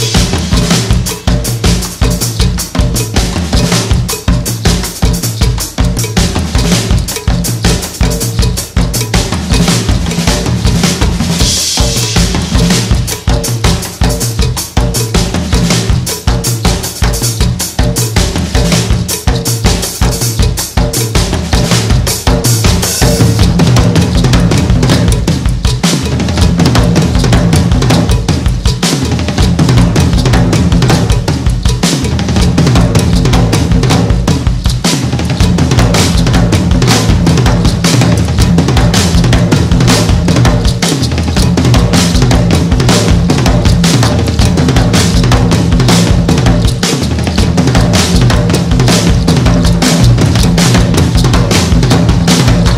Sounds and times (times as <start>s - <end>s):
Bass drum: 0.0s - 52.7s
Drum kit: 0.0s - 52.7s
Snare drum: 0.0s - 52.7s.